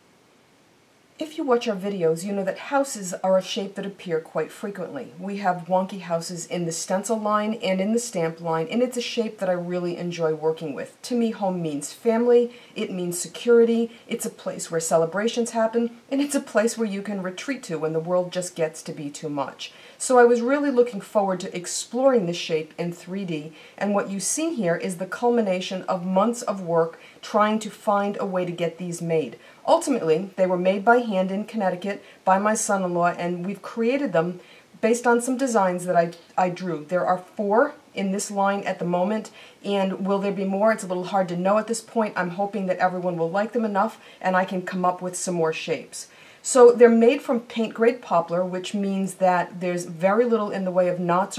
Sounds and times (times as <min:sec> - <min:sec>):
Speech: 0:01.2 - 0:51.3.